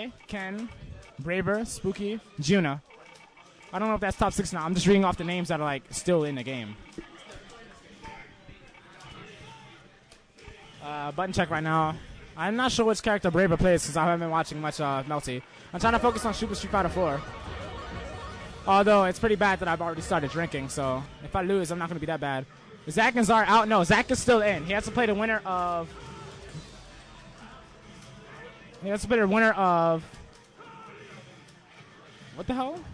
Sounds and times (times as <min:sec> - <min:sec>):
Speech: 0:00.0 - 0:02.9, 0:03.7 - 0:09.9, 0:10.8 - 0:17.2, 0:18.7 - 0:25.9, 0:28.8 - 0:30.1, 0:32.4 - 0:32.9.